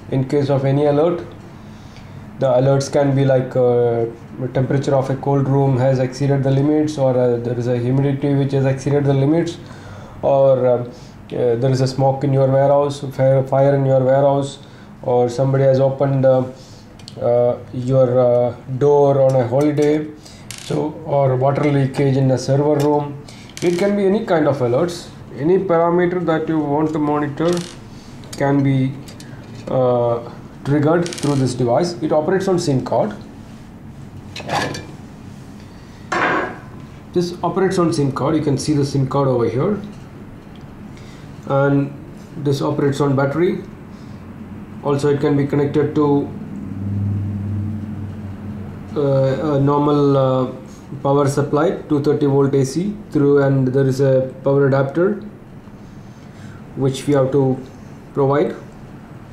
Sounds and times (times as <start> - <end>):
Speech: 0.0 - 1.4, 2.4 - 27.7, 28.4 - 29.0, 29.7 - 33.3, 37.1 - 40.0, 41.5 - 43.8, 44.8 - 46.4, 48.9 - 55.3, 56.8 - 58.7.